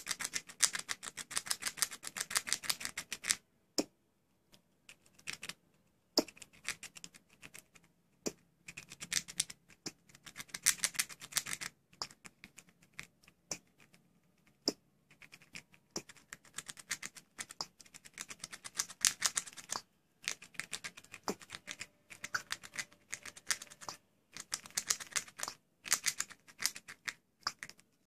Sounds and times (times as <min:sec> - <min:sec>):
Patter: 0:00.0 - 0:03.4, 0:04.9 - 0:28.1.